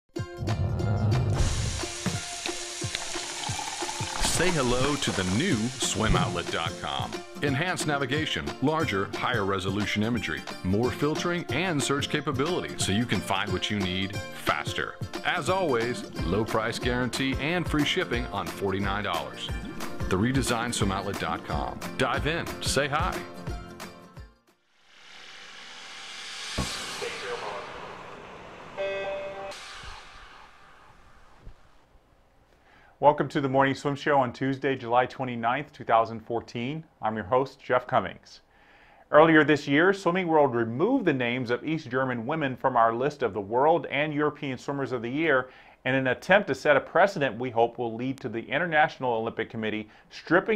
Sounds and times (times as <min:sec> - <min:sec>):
Sizzle: 0:01.3 - 0:07.4.